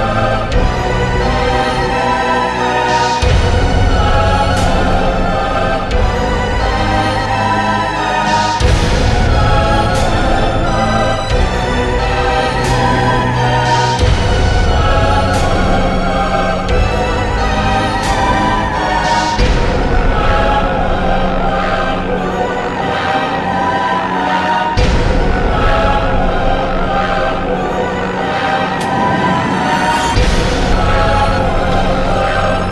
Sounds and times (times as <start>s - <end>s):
Background music: 0.0s - 32.7s.